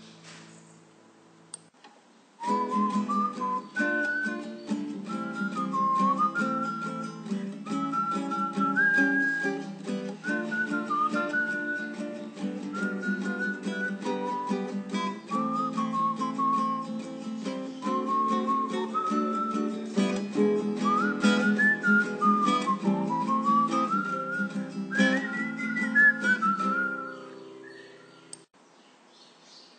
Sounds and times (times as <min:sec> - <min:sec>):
Acoustic guitar: 0:02.4 - 0:28.3.